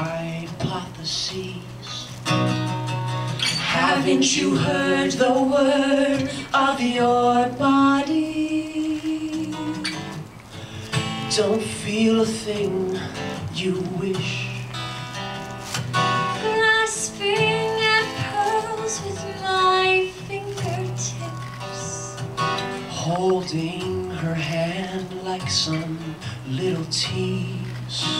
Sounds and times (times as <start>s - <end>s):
Male singing: 0.0s - 2.1s, 3.6s - 9.9s, 11.3s - 14.7s, 22.9s - 28.1s
Music: 0.0s - 28.1s
Female singing: 3.7s - 10.0s, 16.3s - 22.3s.